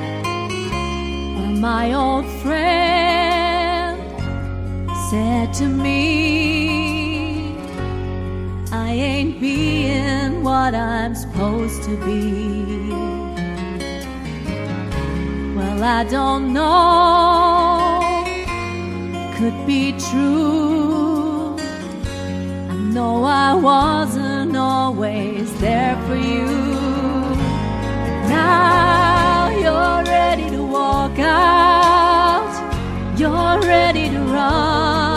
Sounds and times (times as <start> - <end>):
Music: 0.0 - 35.1
Female singing: 1.4 - 4.1, 5.0 - 7.6, 8.7 - 13.0, 15.6 - 18.3, 19.4 - 21.6, 22.8 - 27.6, 28.2 - 35.1.